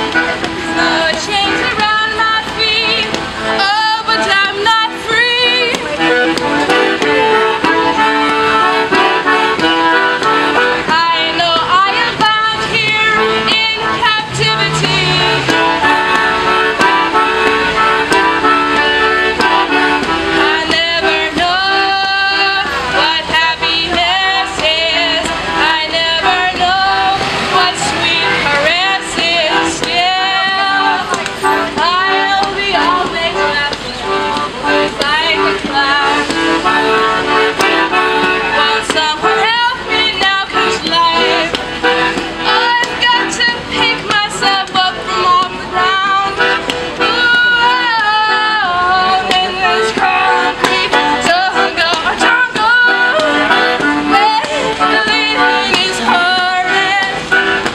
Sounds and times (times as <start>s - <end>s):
Accordion: 0.0s - 57.7s.